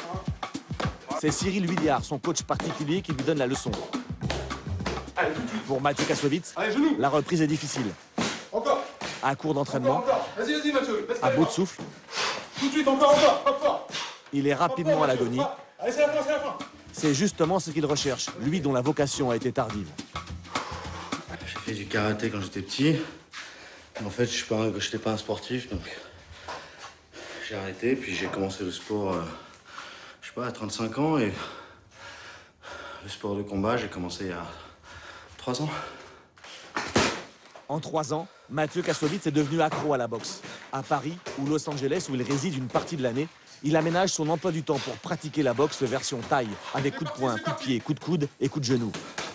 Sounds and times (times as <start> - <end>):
Music: 0.0 - 6.3, 15.8 - 22.8
Speech: 12.6 - 19.9.